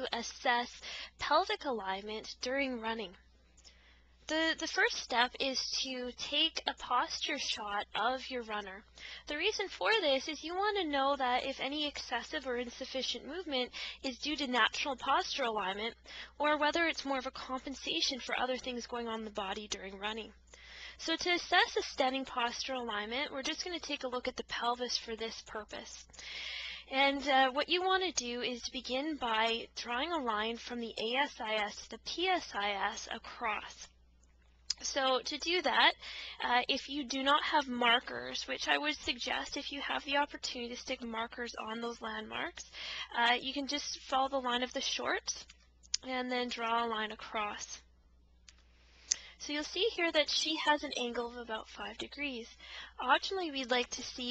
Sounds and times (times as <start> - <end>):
Speech: 0.0 - 3.2, 4.3 - 20.4, 21.0 - 26.1, 26.8 - 33.9, 34.7 - 47.8, 49.4 - 54.3.